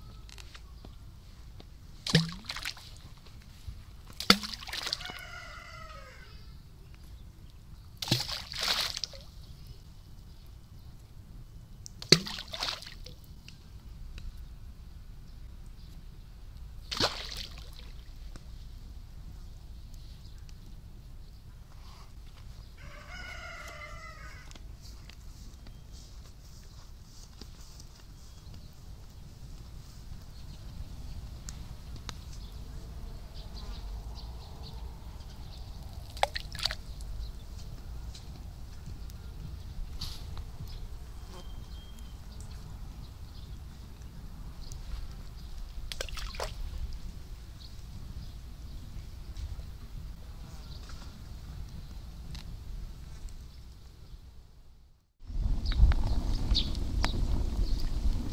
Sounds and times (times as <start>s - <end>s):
Livestock, farm animals, working animals: 22.6s - 25.0s.